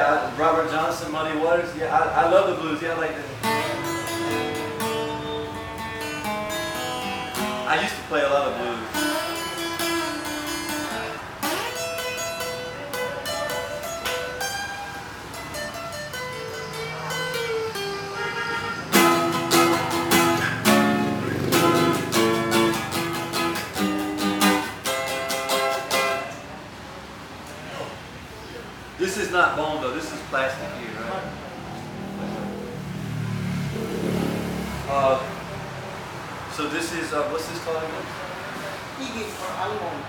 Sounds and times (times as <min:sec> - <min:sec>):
Speech: 0:00.0 - 0:03.4, 0:07.7 - 0:08.9, 0:27.5 - 0:31.4, 0:34.9 - 0:35.4, 0:36.5 - 0:40.0
Music: 0:03.0 - 0:26.4.